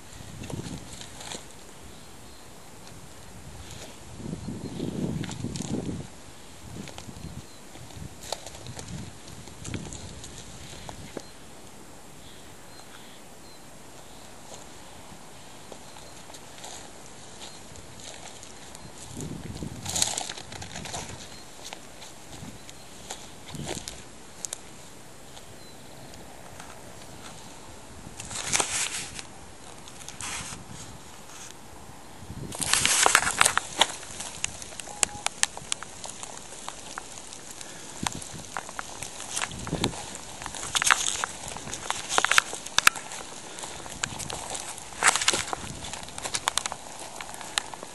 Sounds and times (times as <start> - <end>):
Outside, rural or natural: 0.0 - 47.9.